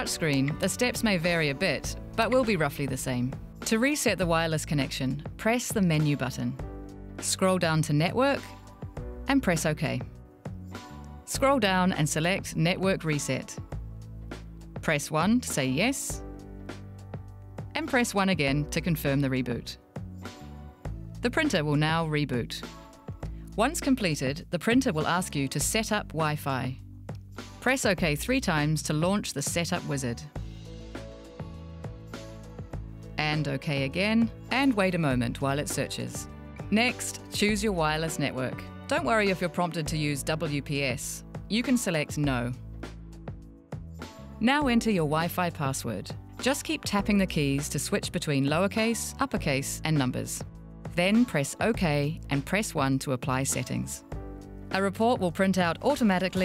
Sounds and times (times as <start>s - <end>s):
Speech: 0.0s - 6.6s, 7.2s - 8.5s, 9.3s - 10.1s, 11.3s - 13.6s, 14.8s - 16.2s, 17.8s - 19.8s, 21.2s - 22.7s, 23.6s - 26.8s, 27.6s - 30.3s, 33.2s - 42.6s, 44.4s - 50.4s, 51.0s - 54.0s, 54.7s - 56.4s
Music: 0.0s - 56.4s.